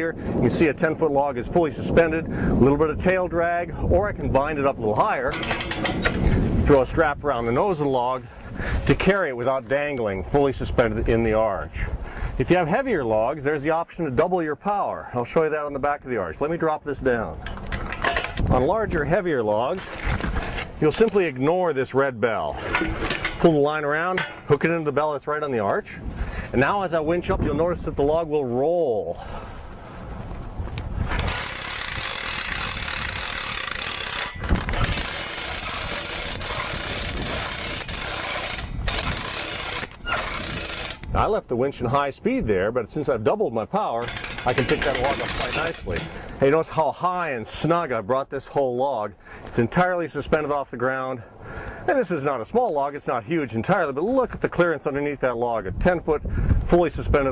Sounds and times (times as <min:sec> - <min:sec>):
Speech: 0:00.0 - 0:05.4, 0:06.7 - 0:08.3, 0:08.9 - 0:17.4, 0:18.5 - 0:19.8, 0:20.8 - 0:22.6, 0:23.4 - 0:29.2, 0:41.2 - 0:51.3, 0:51.9 - 0:57.3.